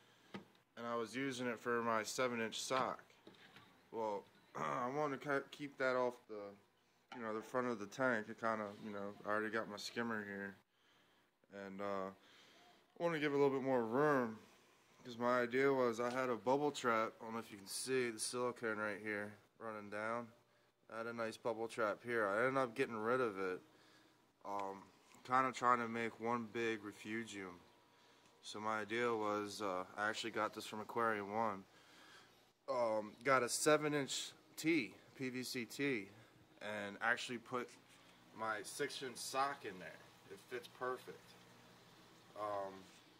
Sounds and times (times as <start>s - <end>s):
Speech: 0.8s - 3.2s, 3.9s - 10.6s, 11.5s - 23.6s, 24.4s - 27.6s, 28.4s - 31.7s, 32.7s - 37.8s, 38.4s - 41.4s, 42.4s - 43.0s.